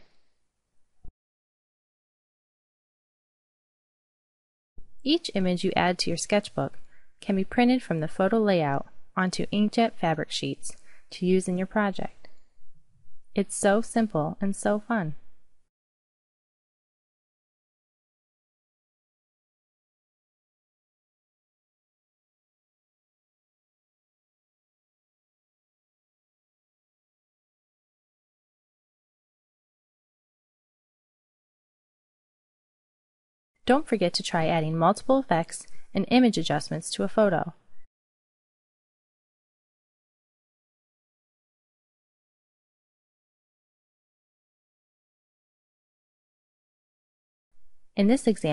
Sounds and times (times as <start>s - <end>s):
Speech: 5.1s - 12.2s, 13.4s - 15.2s, 33.7s - 37.6s, 48.0s - 48.5s.